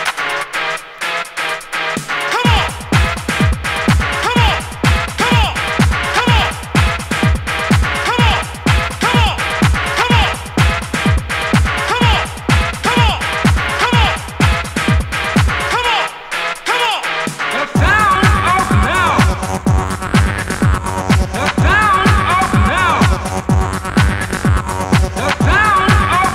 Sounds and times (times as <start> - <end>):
Music: 0.0 - 26.3.